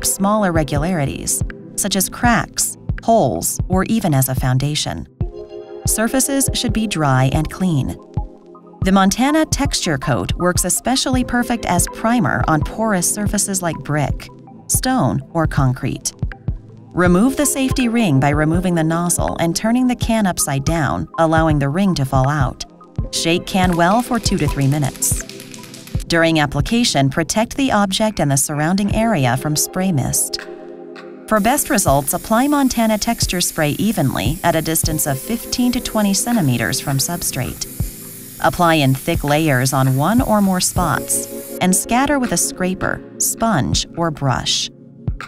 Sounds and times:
Speech: 0.0s - 5.1s, 5.9s - 8.0s, 8.8s - 16.2s, 17.0s - 22.6s, 23.2s - 25.2s, 26.1s - 30.4s, 31.3s - 37.7s, 38.4s - 44.7s
Music: 0.0s - 45.2s.

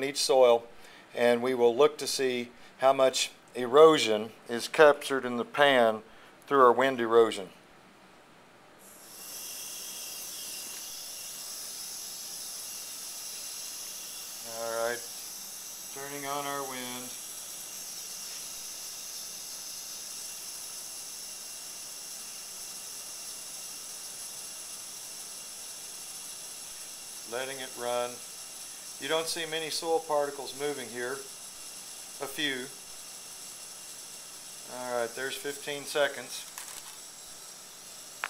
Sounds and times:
Speech: 0.0s - 7.6s, 14.5s - 15.1s, 16.0s - 17.2s, 27.3s - 28.2s, 29.0s - 31.3s, 32.2s - 32.8s, 34.7s - 36.5s.

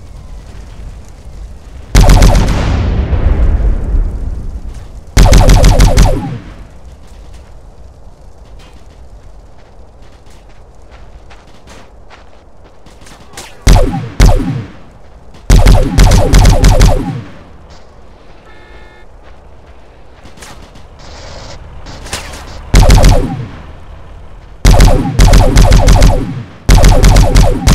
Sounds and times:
Fusillade: 1.9s - 3.0s, 4.7s - 7.2s, 12.9s - 14.8s, 15.4s - 17.4s, 20.3s - 23.6s, 24.6s - 27.7s.

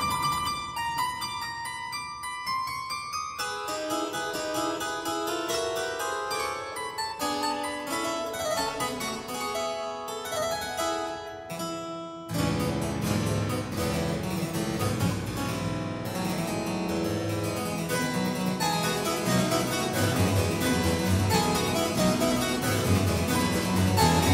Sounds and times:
Piano: 0.0s - 11.5s, 12.3s - 24.3s
Classical music: 0.0s - 24.3s
Harpsichord: 0.0s - 24.3s.

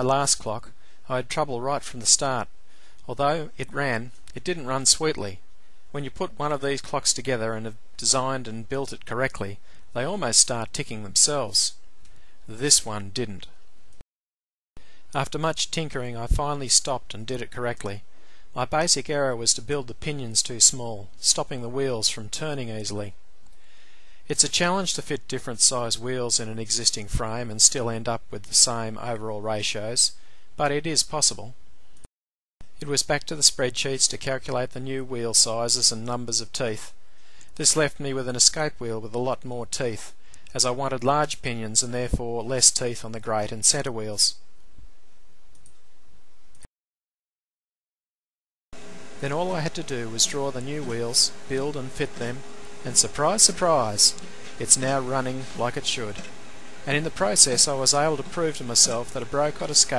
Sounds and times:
Speech: 0.0s - 2.5s, 3.1s - 11.8s, 12.5s - 13.6s, 15.2s - 23.2s, 24.3s - 31.6s, 32.8s - 37.0s, 37.6s - 44.4s, 49.2s - 56.3s, 56.9s - 59.9s.

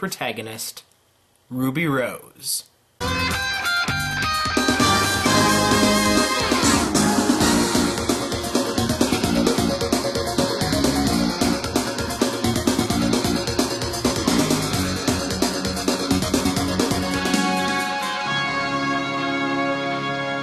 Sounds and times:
Soundtrack music: 3.0s - 20.4s.

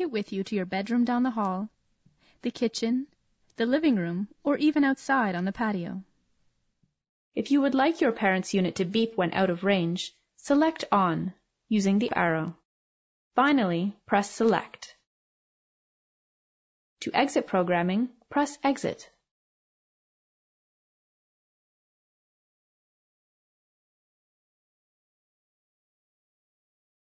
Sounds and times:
Speech: 0.0s - 1.8s, 2.4s - 6.1s, 7.4s - 12.6s, 13.4s - 15.1s, 17.0s - 19.2s.

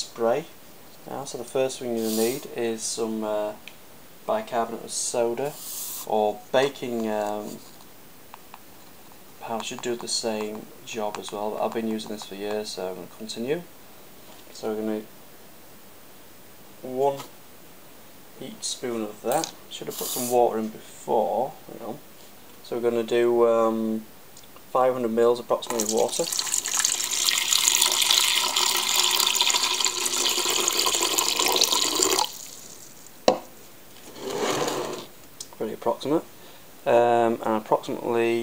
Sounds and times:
Speech: 0.0s - 3.6s, 4.3s - 7.6s, 9.4s - 13.7s, 14.5s - 15.1s, 16.8s - 17.3s, 18.4s - 22.0s, 22.6s - 24.1s, 24.7s - 26.3s, 35.5s - 38.4s.

